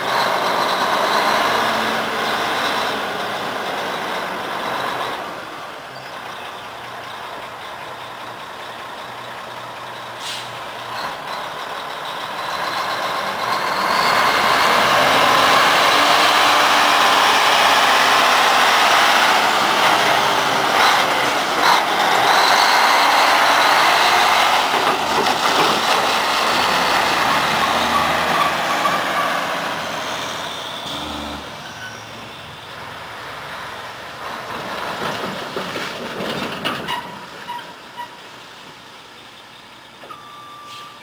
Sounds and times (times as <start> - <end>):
Truck: 0.0 - 41.0.